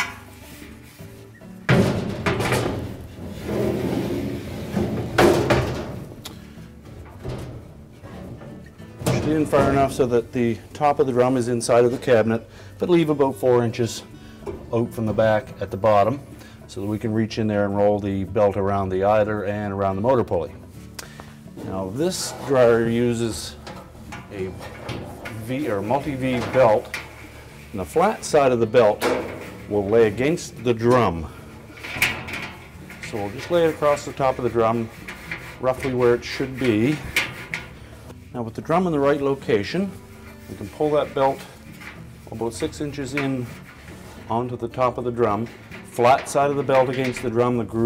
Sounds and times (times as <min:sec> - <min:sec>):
Music: 0:00.0 - 0:47.8
Speech: 0:09.1 - 0:14.1, 0:14.7 - 0:20.6, 0:21.6 - 0:23.7, 0:24.3 - 0:27.0, 0:27.7 - 0:31.3, 0:33.0 - 0:35.0, 0:35.6 - 0:37.2, 0:38.3 - 0:41.5, 0:42.3 - 0:43.6, 0:44.2 - 0:47.8.